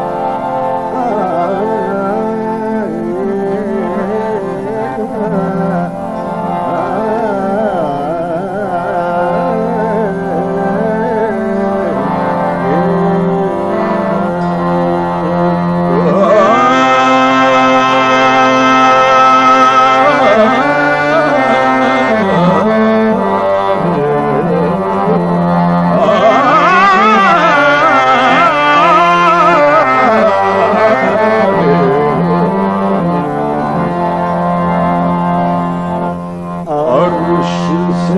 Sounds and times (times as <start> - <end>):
Carnatic music: 0.0 - 38.1
Middle Eastern music: 0.0 - 38.1.